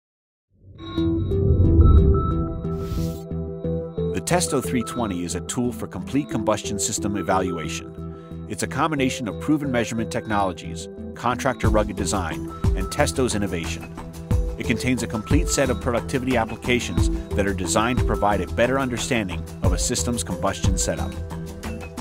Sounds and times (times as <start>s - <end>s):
Music: 0.7s - 22.0s
Speech: 4.2s - 7.9s, 8.5s - 13.9s, 14.6s - 21.2s.